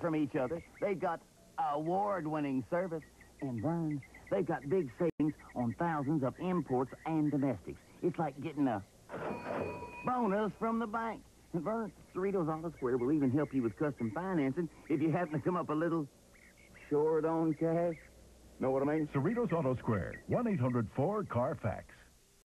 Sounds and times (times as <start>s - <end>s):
Speech: 0.0s - 8.9s, 10.1s - 16.1s, 16.8s - 22.1s.